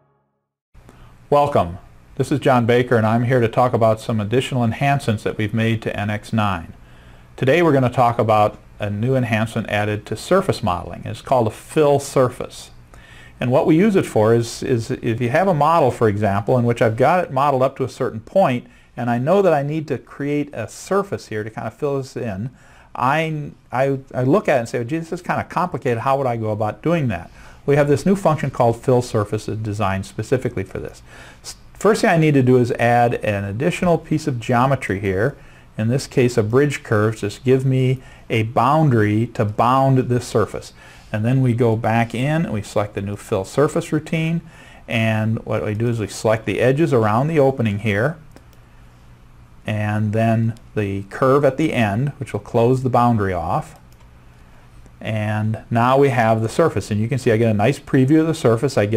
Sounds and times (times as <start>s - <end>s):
Speech: 1.3s - 6.8s, 7.4s - 12.8s, 13.4s - 48.2s, 49.6s - 53.8s, 55.0s - 58.9s.